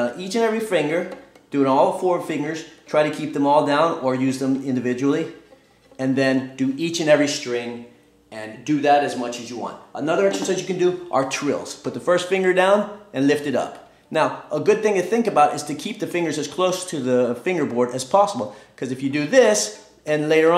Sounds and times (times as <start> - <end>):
Speech: 0.0 - 5.4, 6.0 - 20.5.